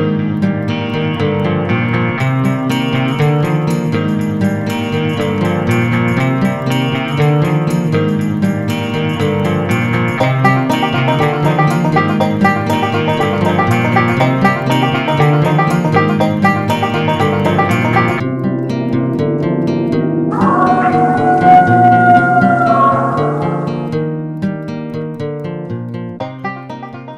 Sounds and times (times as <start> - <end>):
Music: 0.0 - 27.1.